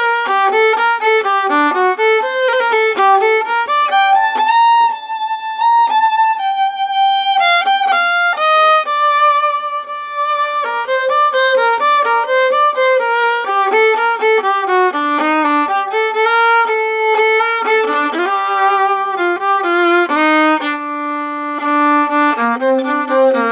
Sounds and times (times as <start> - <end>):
Violin, fiddle: 0.0 - 23.5.